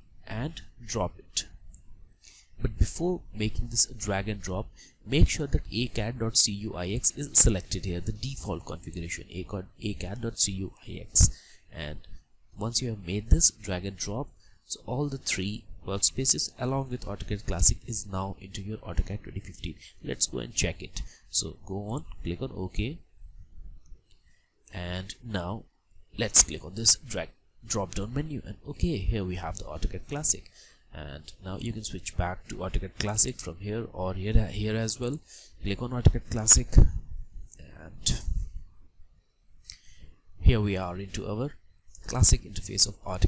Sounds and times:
Speech: 0.2s - 1.6s, 2.6s - 23.0s, 24.7s - 38.4s, 40.4s - 43.2s.

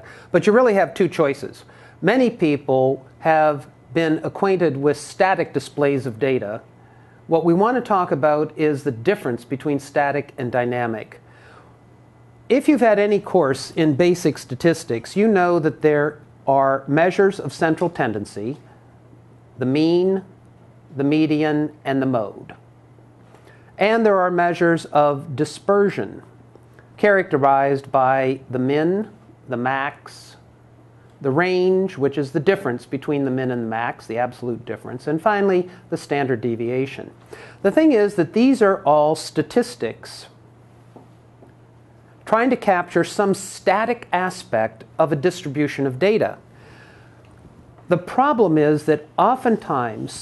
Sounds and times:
Speech: 0.0s - 6.7s, 7.3s - 11.2s, 12.5s - 18.7s, 19.6s - 22.6s, 23.8s - 26.3s, 27.0s - 30.5s, 31.2s - 40.4s, 42.2s - 46.4s, 47.9s - 50.2s.

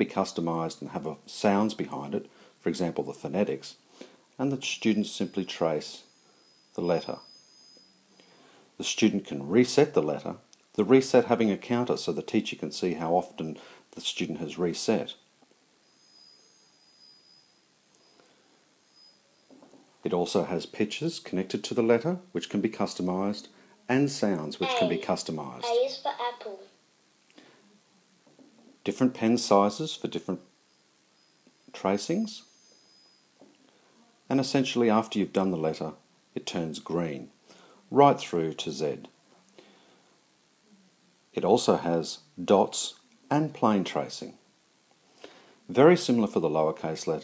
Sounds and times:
Speech: 0.0s - 3.8s, 4.4s - 6.1s, 6.8s - 7.2s, 8.8s - 15.2s, 20.0s - 26.7s, 28.8s - 30.4s, 31.7s - 32.5s, 34.3s - 39.1s, 41.4s - 44.4s, 45.7s - 47.2s.

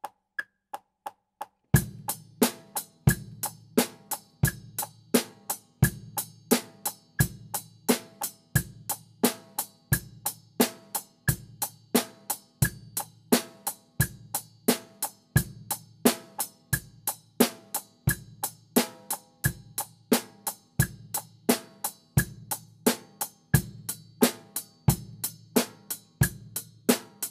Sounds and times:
Drum: 1.8s - 27.3s
Drum kit: 1.8s - 27.3s
Hi-hat: 1.8s - 27.3s.

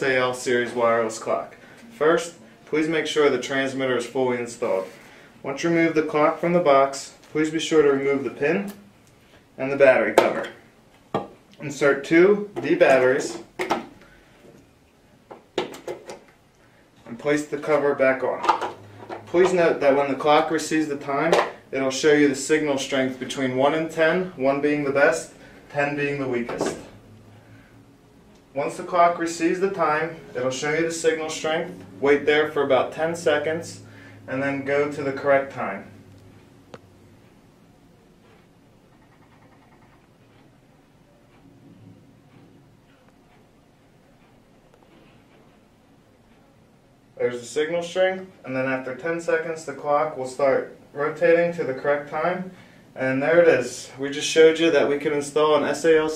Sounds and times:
Speech: 0.0s - 8.9s, 9.6s - 10.6s, 11.6s - 13.5s, 17.0s - 18.6s, 19.3s - 27.0s, 28.6s - 36.0s, 47.2s - 56.1s.

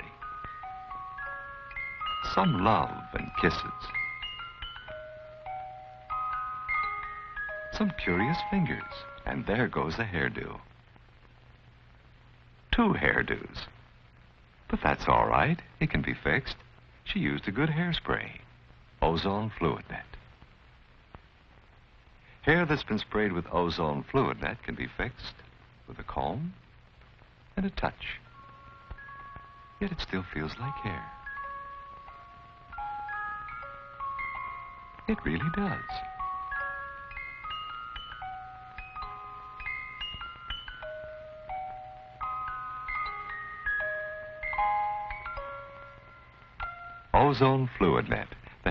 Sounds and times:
Speech: 0.0s - 0.2s, 2.2s - 4.0s, 7.7s - 10.7s, 12.7s - 13.8s, 14.7s - 20.2s, 22.4s - 26.6s, 27.6s - 28.3s, 29.8s - 31.2s, 35.1s - 36.1s, 47.1s - 48.7s.

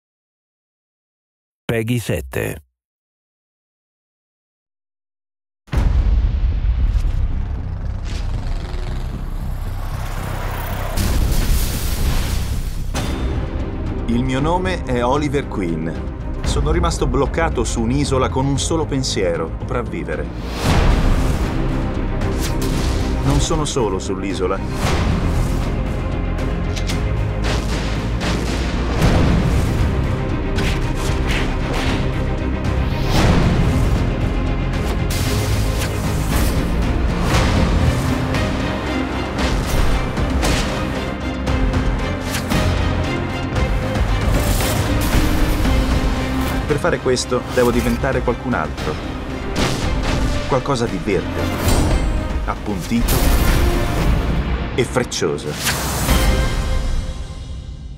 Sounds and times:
Music: 5.7s - 57.9s.

